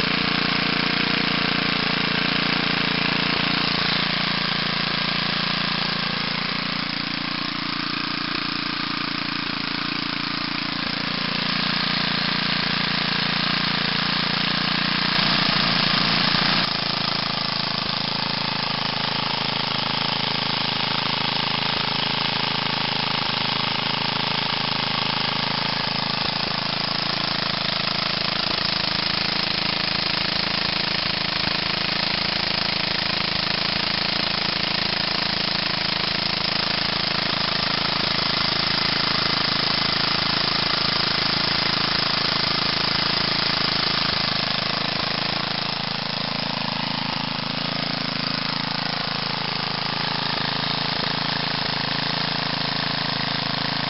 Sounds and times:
Engine starting: 0:00.0 - 0:53.9
Idling: 0:00.0 - 0:53.9
Medium engine (mid frequency): 0:00.0 - 0:53.9.

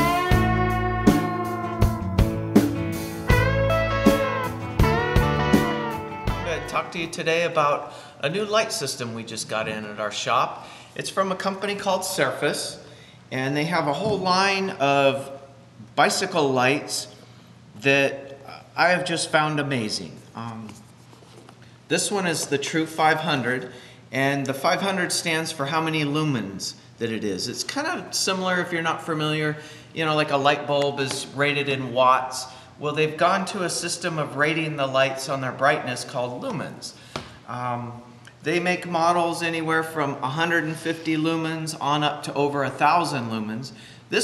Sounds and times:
Speech: 0:06.5 - 0:17.1, 0:17.8 - 0:20.8, 0:21.9 - 0:44.2.

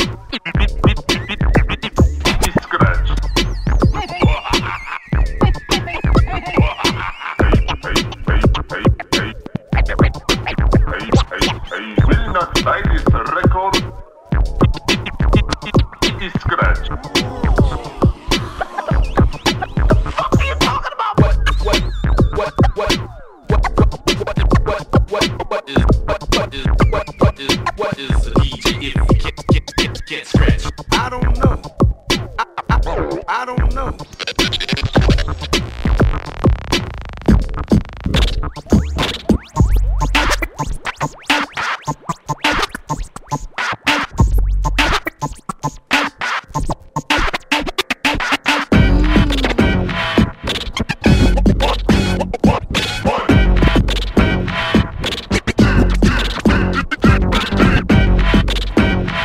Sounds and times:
Scratching (performance technique): 0:00.0 - 0:59.2.

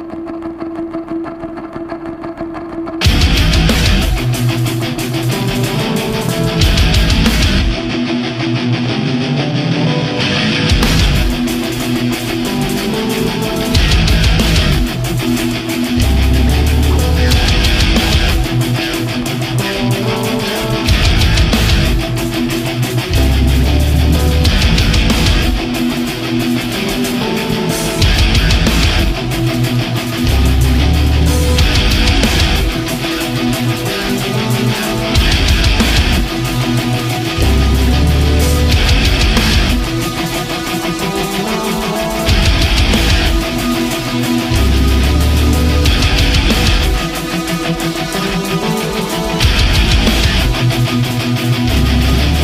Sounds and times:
Angry music: 0:00.0 - 0:52.4.

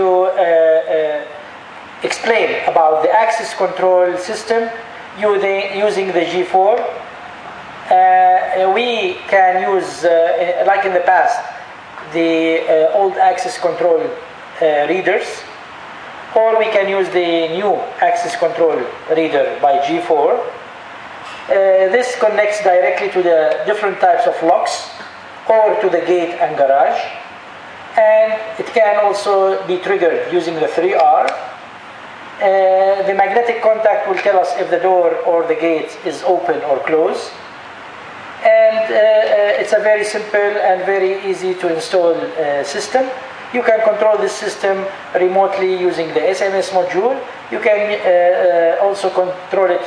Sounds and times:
Speech: 0:00.0 - 0:01.4, 0:02.0 - 0:07.1, 0:07.9 - 0:15.6, 0:16.3 - 0:20.6, 0:21.5 - 0:27.3, 0:28.0 - 0:31.6, 0:32.4 - 0:37.4, 0:38.4 - 0:49.8.

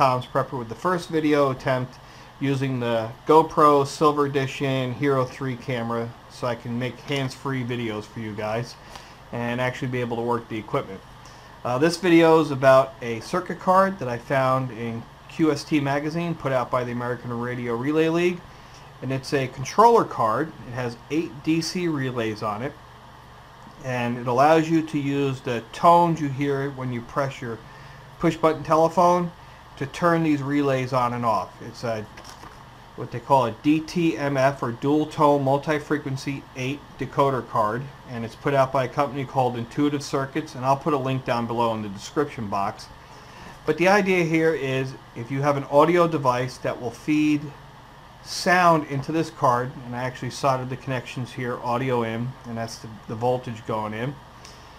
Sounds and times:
Speech: 0:00.0 - 0:22.8, 0:23.8 - 0:32.2, 0:33.0 - 0:43.0, 0:43.6 - 0:47.6, 0:48.2 - 0:54.2.

